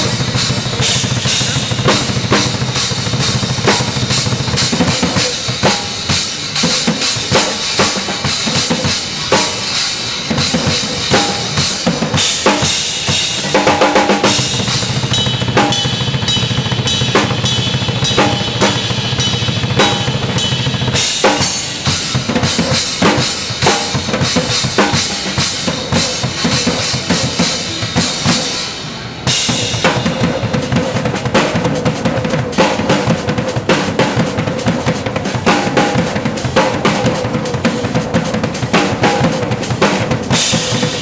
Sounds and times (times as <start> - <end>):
Music: 0.0 - 41.0.